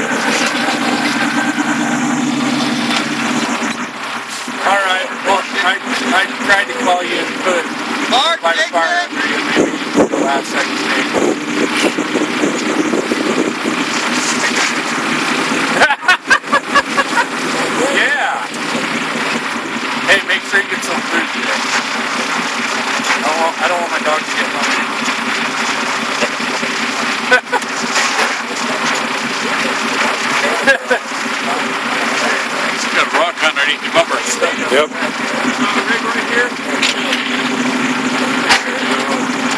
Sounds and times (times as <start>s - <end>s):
Truck: 0.0s - 39.5s
Speech: 4.6s - 11.3s, 17.7s - 18.6s, 20.0s - 21.6s, 23.2s - 24.9s, 30.3s - 37.3s, 38.2s - 39.4s.